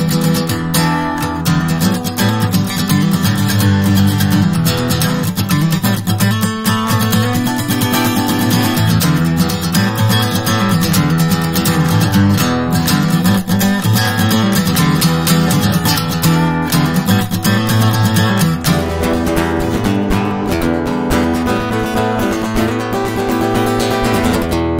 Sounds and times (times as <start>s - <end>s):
Acoustic guitar: 0.0s - 24.7s.